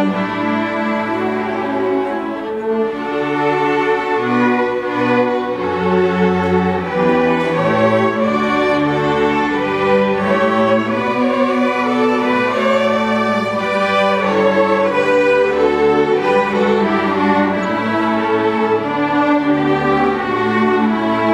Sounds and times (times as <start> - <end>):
Orchestra: 0.0 - 21.3
String section: 0.0 - 21.3.